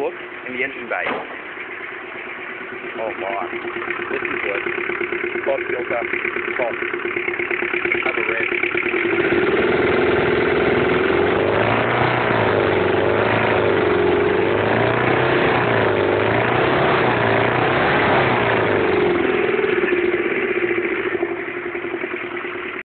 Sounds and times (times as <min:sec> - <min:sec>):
Vehicle: 0:00.0 - 0:22.8
Accelerating, revving, vroom: 0:09.1 - 0:19.3.